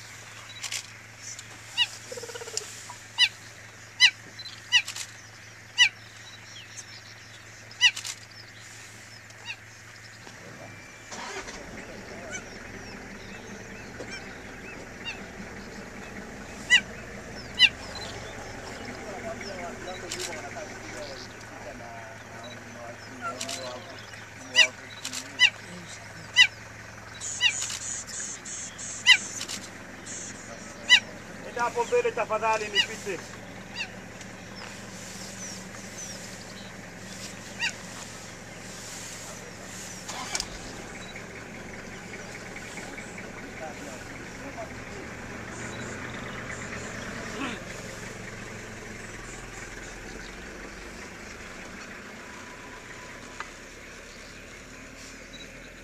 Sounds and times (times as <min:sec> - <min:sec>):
Animal: 0:07.8 - 0:08.2, 0:11.8 - 0:26.6, 0:27.2 - 0:32.0, 0:32.6 - 0:38.3
Speech: 0:30.5 - 0:33.3.